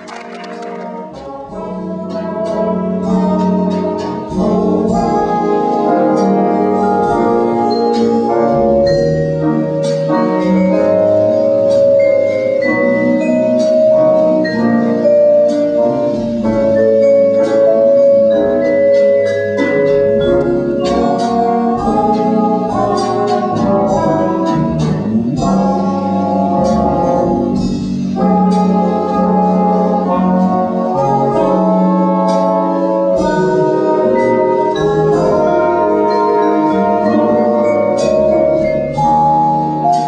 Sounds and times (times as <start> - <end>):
Bass drum: 0.0 - 12.0, 16.0 - 36.1
Drum kit: 0.0 - 40.0.